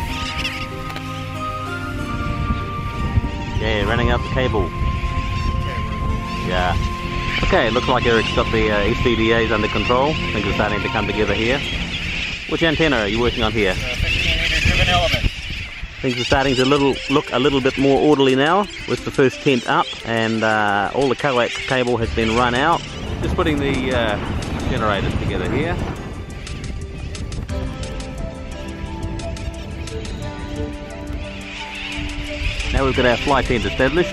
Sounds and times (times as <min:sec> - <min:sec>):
Music: 0:00.0 - 0:34.1
Outside, rural or natural: 0:00.0 - 0:34.1
Speech: 0:16.0 - 0:25.8, 0:32.7 - 0:34.1.